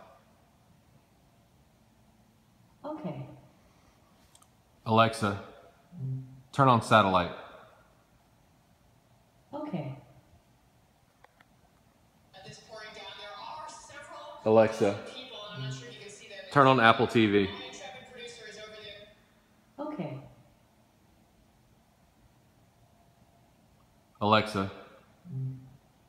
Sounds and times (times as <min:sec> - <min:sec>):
Speech: 0:02.9 - 0:03.4, 0:09.6 - 0:10.0, 0:12.4 - 0:19.1, 0:19.8 - 0:20.3, 0:24.2 - 0:25.5.